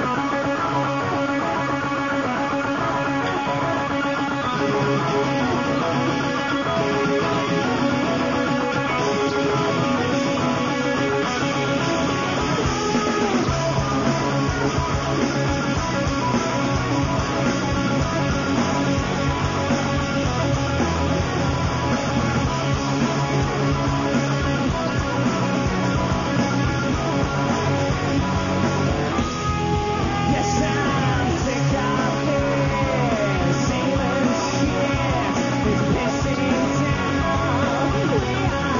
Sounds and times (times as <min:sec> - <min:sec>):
Music: 0:00.0 - 0:38.7.